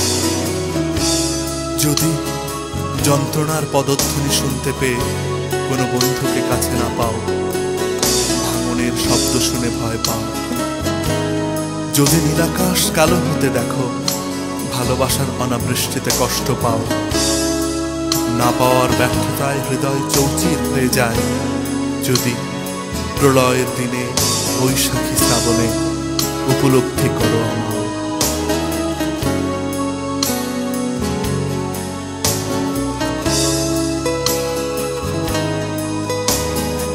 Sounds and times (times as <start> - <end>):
Music: 0.0 - 36.9
Speech: 1.8 - 2.3, 2.9 - 7.4, 8.3 - 10.6, 11.9 - 17.1, 18.3 - 21.4, 22.0 - 22.6, 23.2 - 27.9.